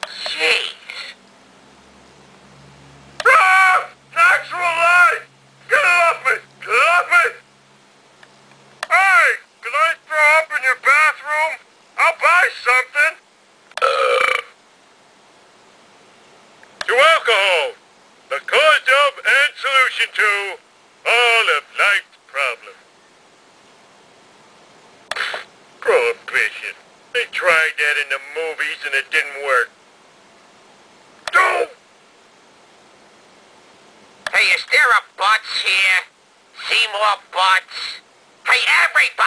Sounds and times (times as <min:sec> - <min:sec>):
Speech: 0:00.1 - 0:01.2, 0:03.2 - 0:07.4, 0:08.9 - 0:13.2, 0:16.9 - 0:22.8, 0:25.8 - 0:29.7, 0:31.3 - 0:31.8, 0:34.3 - 0:39.2.